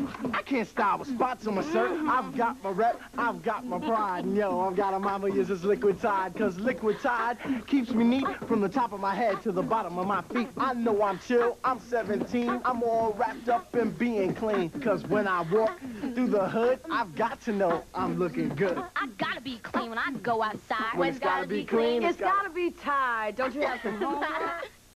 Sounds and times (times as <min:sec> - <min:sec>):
Speech: 0:00.0 - 0:24.7.